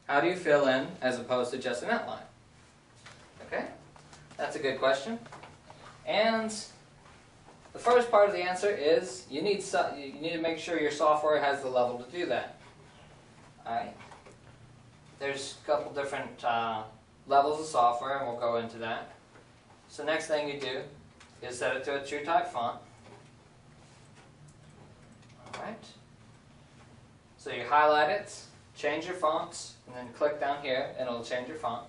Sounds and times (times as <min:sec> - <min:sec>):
Speech: 0:00.0 - 0:02.4, 0:03.4 - 0:03.8, 0:04.4 - 0:05.4, 0:06.0 - 0:06.8, 0:07.7 - 0:12.6, 0:13.6 - 0:14.1, 0:15.2 - 0:19.2, 0:19.9 - 0:22.9, 0:25.4 - 0:26.0, 0:27.4 - 0:31.8.